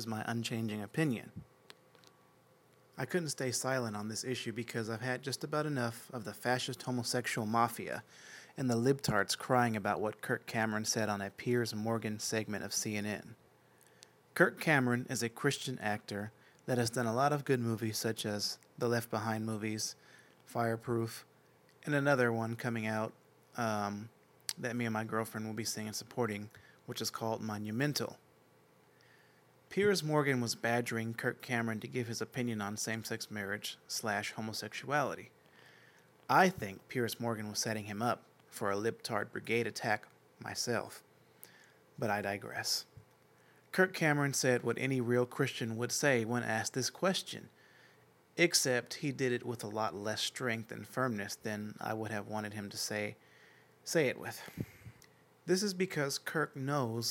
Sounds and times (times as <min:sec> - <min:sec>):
Male speech, man speaking: 0:00.0 - 0:01.4, 0:03.0 - 0:13.4, 0:14.4 - 0:28.2, 0:29.7 - 0:35.3, 0:36.3 - 0:41.0, 0:42.0 - 0:43.0, 0:43.7 - 0:47.5, 0:48.4 - 0:53.2, 0:53.9 - 0:54.6, 0:55.5 - 0:57.1
Narration, monologue: 0:00.0 - 0:57.1.